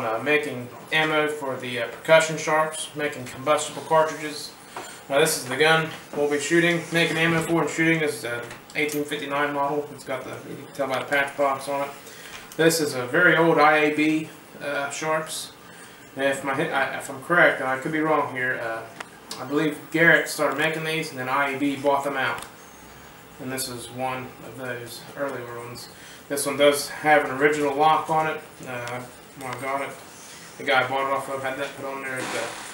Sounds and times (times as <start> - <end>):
Speech: 0.0 - 12.0, 12.6 - 15.6, 16.2 - 22.5, 23.4 - 30.0, 30.6 - 32.7.